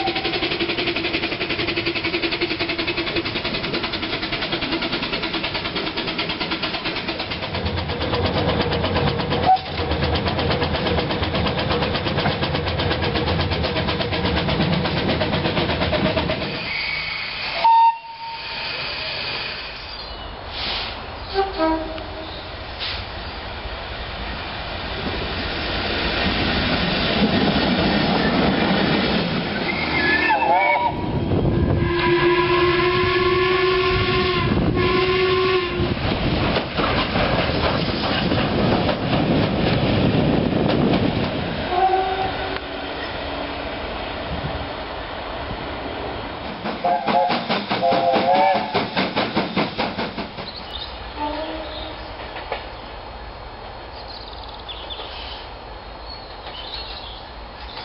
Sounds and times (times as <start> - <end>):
Steam whistle: 0.0 - 0.4, 16.6 - 19.6, 20.6 - 22.2, 29.7 - 35.9, 41.7 - 42.7, 46.8 - 48.9.